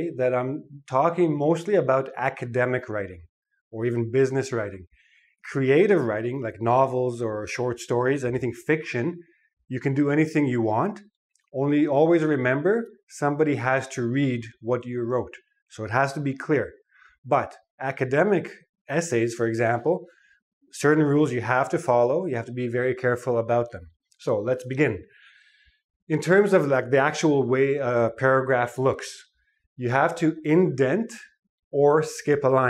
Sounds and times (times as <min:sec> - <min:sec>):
Speech: 0:00.0 - 0:03.2, 0:03.8 - 0:04.8, 0:05.4 - 0:16.7, 0:17.3 - 0:20.1, 0:20.8 - 0:25.1, 0:26.1 - 0:29.2, 0:29.8 - 0:32.6.